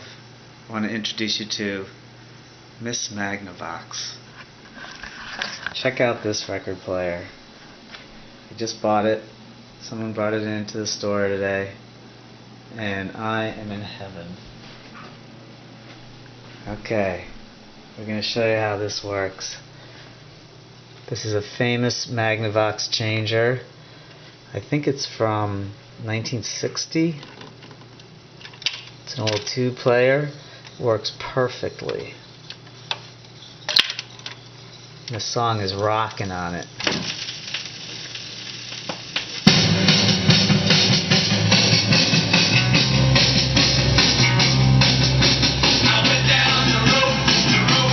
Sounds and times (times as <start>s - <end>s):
Speech: 0.7s - 2.0s, 2.8s - 4.3s, 5.7s - 7.4s, 8.5s - 11.8s, 12.7s - 14.5s, 16.6s - 17.4s, 18.0s - 19.7s, 21.1s - 23.7s, 24.5s - 27.2s, 29.1s - 32.2s, 35.1s - 36.7s.